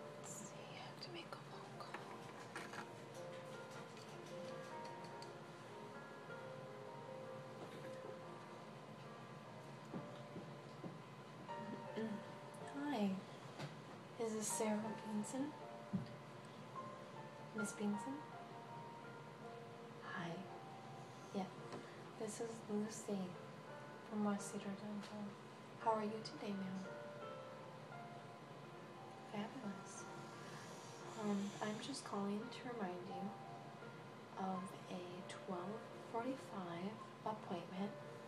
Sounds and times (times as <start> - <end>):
Music: 0.0 - 38.2.